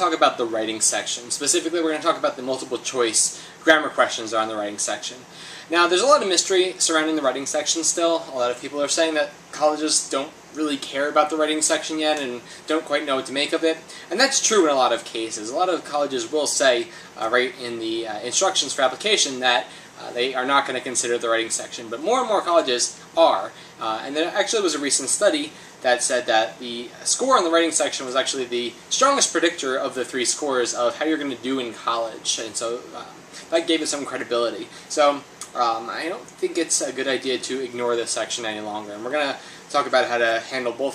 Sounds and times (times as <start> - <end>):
Speech: 0.0 - 40.9.